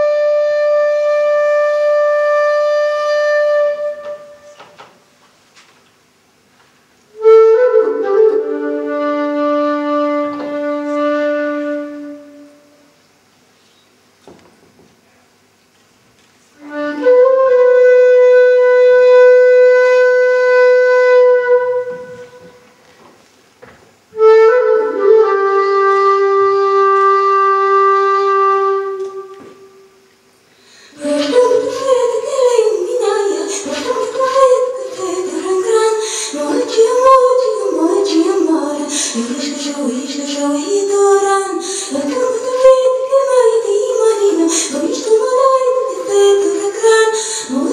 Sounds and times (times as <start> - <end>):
Flute: 0.0 - 4.8, 7.1 - 12.9, 16.6 - 22.7, 24.1 - 30.0, 31.0 - 47.7.